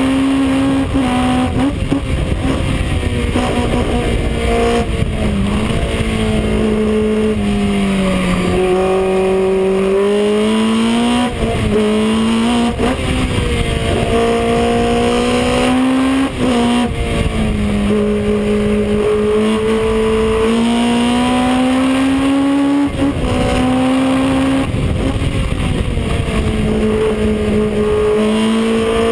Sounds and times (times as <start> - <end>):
Car: 0.0 - 29.1.